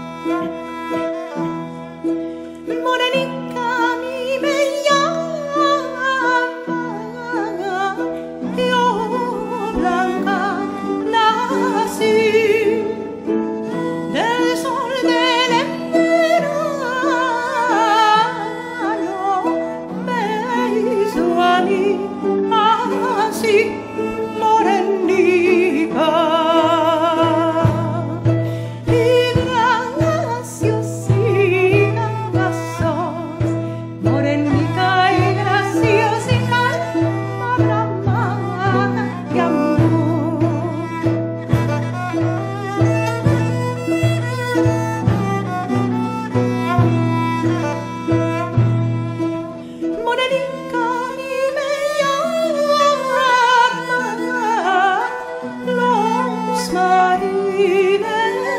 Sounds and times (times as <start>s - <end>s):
Tender music: 0.0s - 58.5s.